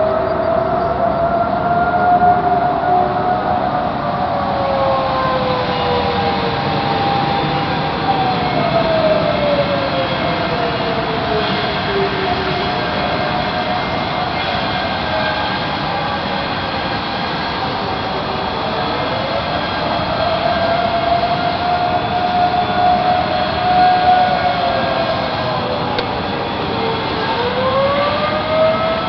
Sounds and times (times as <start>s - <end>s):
Siren: 0.0s - 29.0s.